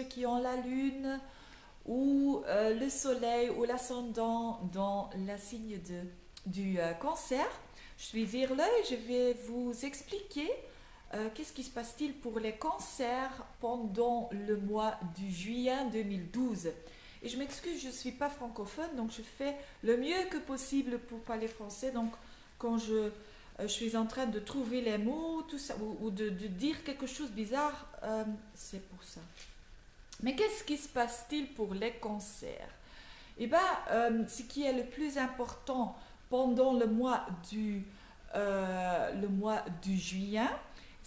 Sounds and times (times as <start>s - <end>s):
Speech: 0.0s - 29.4s, 30.2s - 32.8s, 33.4s - 40.7s.